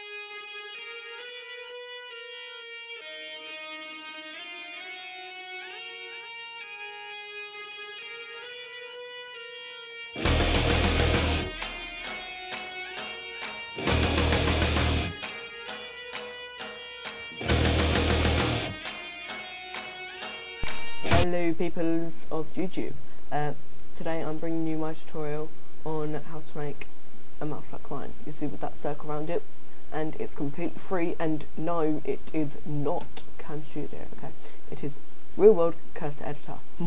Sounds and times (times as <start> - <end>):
Speech: 21.1 - 36.8.